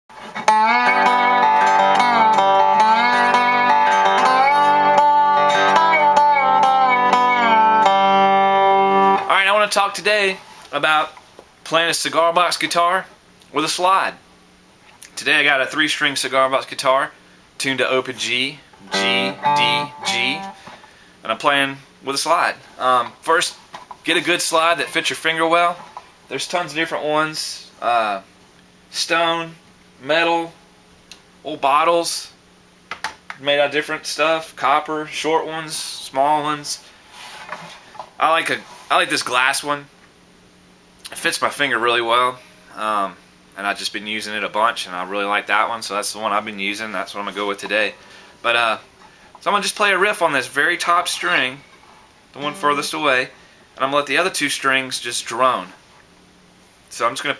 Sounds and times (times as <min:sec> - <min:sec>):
Speech: 0:09.3 - 0:14.2, 0:15.1 - 0:18.6, 0:21.2 - 0:28.3, 0:28.9 - 0:30.6, 0:31.4 - 0:32.4, 0:33.4 - 0:36.9, 0:38.2 - 0:39.9, 0:41.1 - 0:48.8, 0:49.4 - 0:51.6, 0:52.4 - 0:55.8, 0:56.9 - 0:57.3.